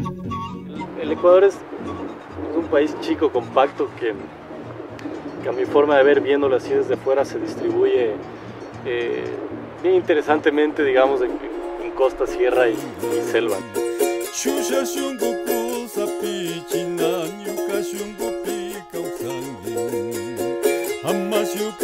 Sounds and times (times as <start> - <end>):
Music: 0.0 - 21.8
Speech: 1.0 - 1.6, 2.6 - 4.2, 5.4 - 8.2, 8.9 - 13.6.